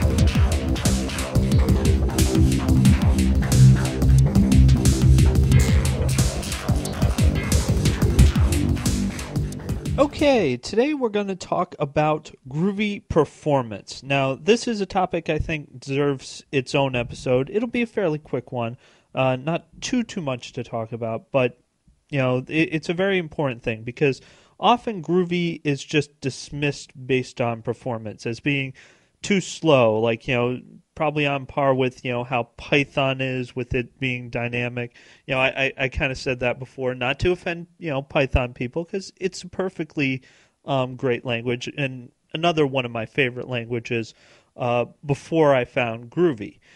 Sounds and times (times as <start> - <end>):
Music: 0.0 - 10.5
Speech: 10.0 - 46.6.